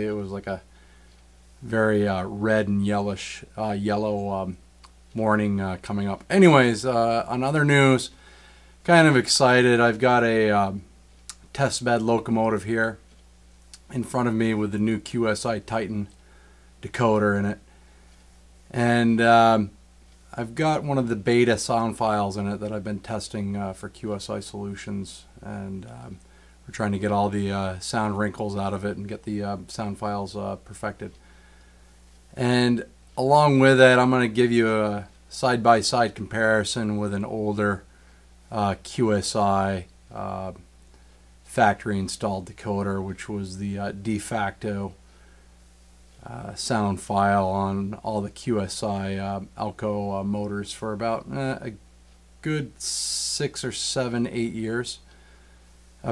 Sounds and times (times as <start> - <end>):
Speech: 0.0 - 0.7, 1.6 - 8.2, 8.8 - 13.0, 13.8 - 16.2, 16.8 - 17.6, 18.7 - 31.2, 32.3 - 37.9, 38.5 - 40.7, 41.5 - 45.0, 46.2 - 51.8, 52.4 - 55.1.